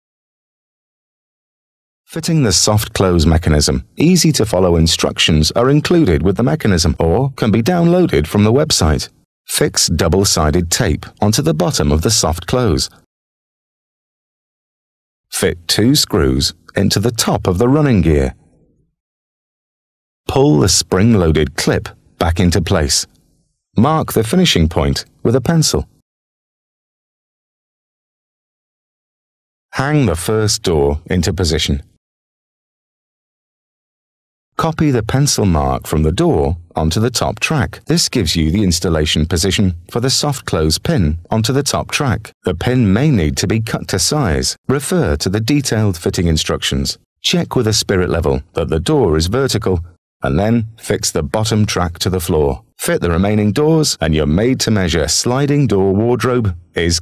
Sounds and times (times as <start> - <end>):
Speech synthesizer: 2.1 - 13.0, 15.4 - 18.4, 20.3 - 23.1, 23.8 - 25.9, 29.8 - 31.9, 34.6 - 57.0
Narration, monologue: 2.1 - 13.1, 15.3 - 18.9, 20.2 - 26.0, 29.7 - 32.0, 34.6 - 57.0.